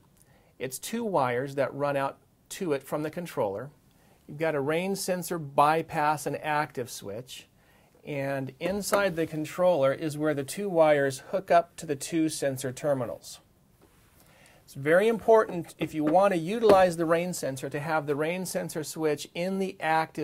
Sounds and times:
Speech: 0:00.6 - 0:13.5, 0:14.7 - 0:20.2.

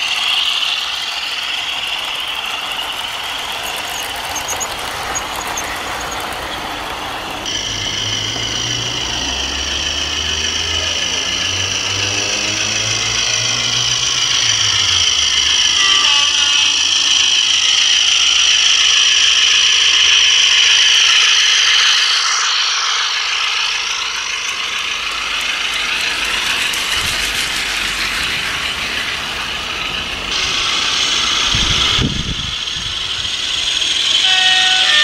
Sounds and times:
Outside, urban or manmade: 0:00.0 - 0:35.0
Train: 0:00.0 - 0:35.0.

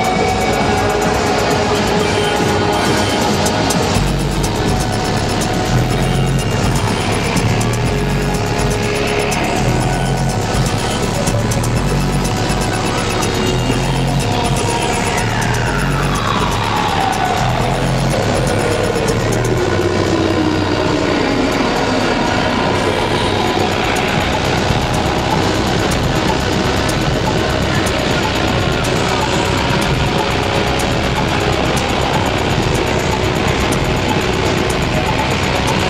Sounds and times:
Music: 0:00.0 - 0:35.9.

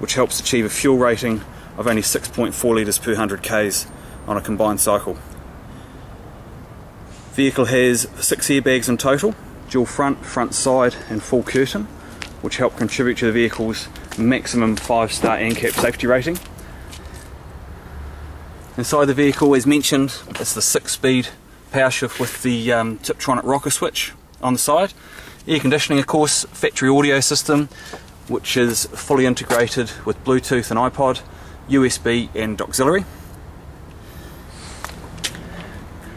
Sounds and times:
Speech: 0:00.0 - 0:05.3, 0:07.3 - 0:16.5, 0:18.8 - 0:27.7, 0:28.3 - 0:33.1.

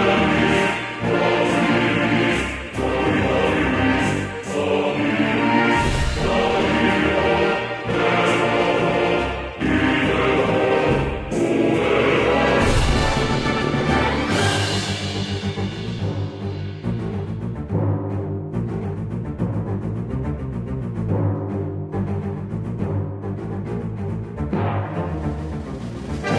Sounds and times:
Soundtrack music: 0:00.0 - 0:26.3.

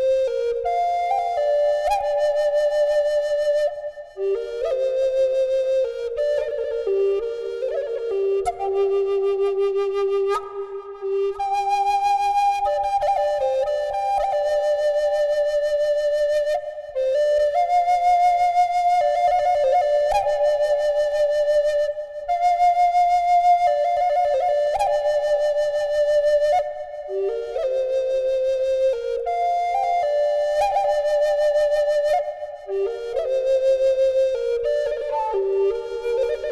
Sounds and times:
Flute: 0:00.0 - 0:36.5.

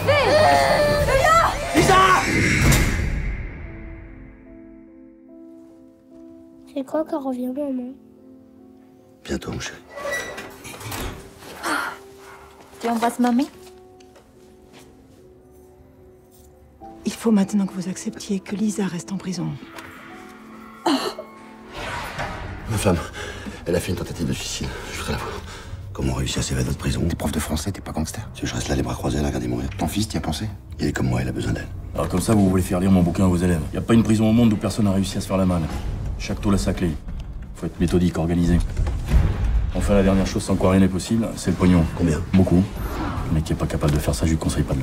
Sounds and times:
Music: 0:00.0 - 0:44.8.

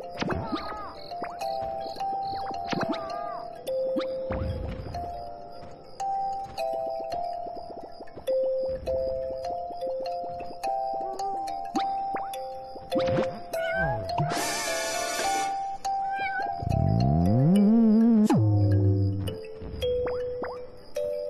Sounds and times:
Music: 0:00.0 - 0:21.3.

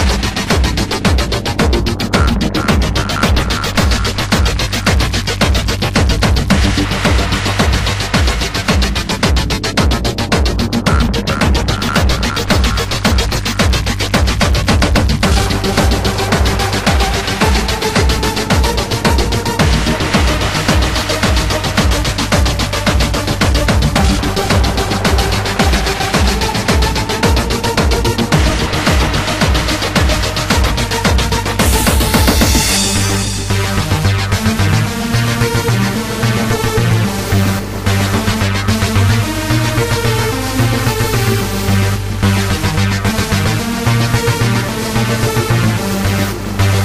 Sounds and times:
Techno: 0:00.0 - 0:46.8.

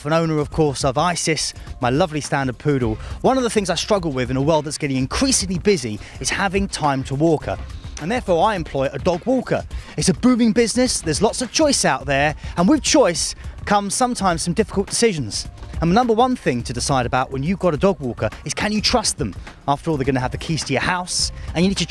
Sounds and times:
Music: 0:00.0 - 0:21.9
Speech: 0:00.0 - 0:21.9.

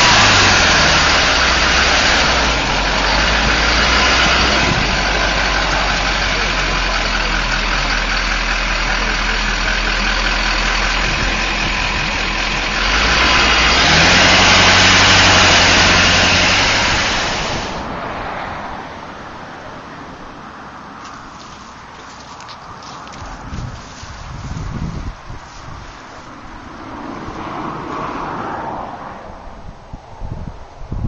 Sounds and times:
Motor vehicle (road): 0:00.0 - 0:31.0.

